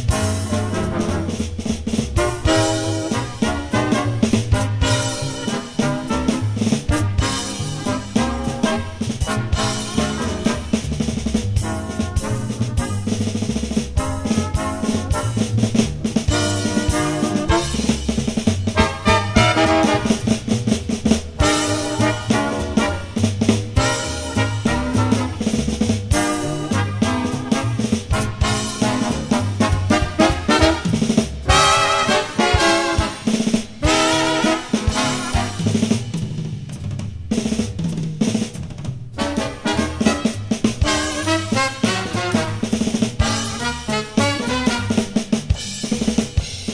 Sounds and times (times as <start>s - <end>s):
Drum: 0.0s - 46.7s
Drum kit: 0.0s - 46.7s
Swing music: 0.0s - 46.7s.